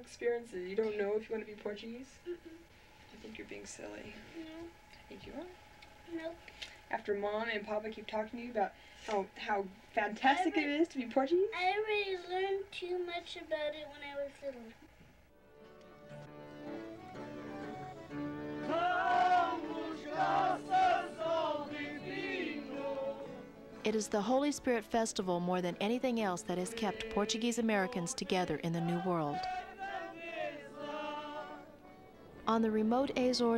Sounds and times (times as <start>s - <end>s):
Music: 15.3s - 33.5s.